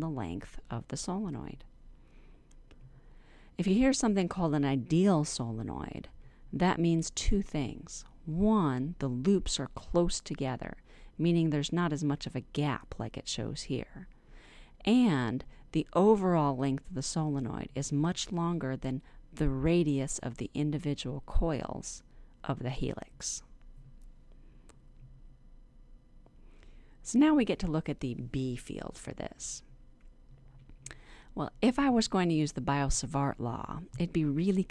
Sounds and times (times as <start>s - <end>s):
Speech: 0.0s - 1.7s, 3.6s - 14.1s, 14.8s - 23.5s, 27.0s - 29.7s, 31.4s - 34.7s.